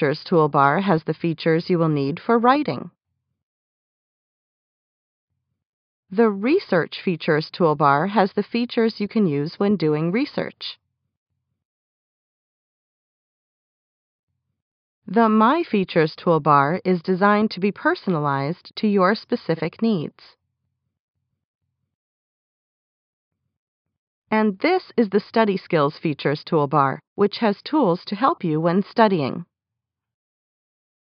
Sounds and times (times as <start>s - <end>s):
Speech: 0.0s - 2.9s, 6.2s - 10.8s, 15.1s - 20.4s, 24.3s - 29.4s.